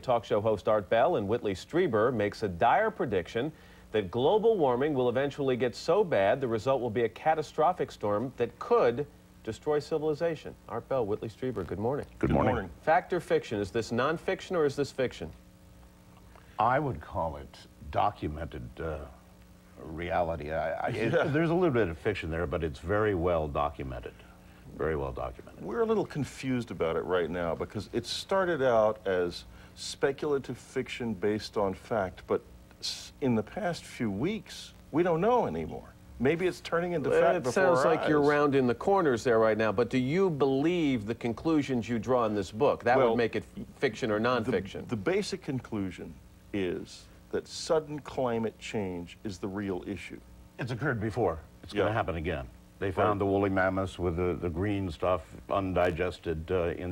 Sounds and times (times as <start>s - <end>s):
Speech: 0.0s - 15.4s, 16.6s - 19.2s, 19.8s - 56.9s.